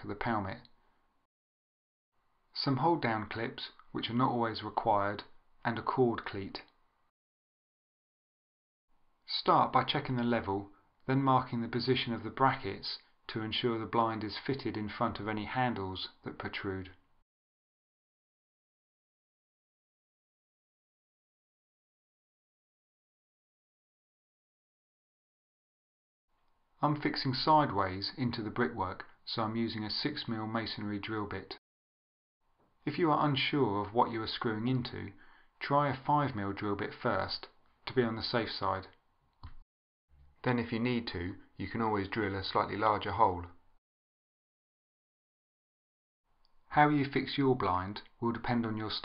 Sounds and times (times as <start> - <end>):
Speech: 0.0 - 0.8, 2.5 - 6.8, 9.3 - 17.0, 26.8 - 31.6, 32.8 - 39.0, 40.4 - 43.6, 46.7 - 49.0
Inside, small room: 0.0 - 1.3, 2.1 - 7.2, 8.9 - 17.3, 26.3 - 31.6, 32.4 - 43.8, 46.2 - 49.0.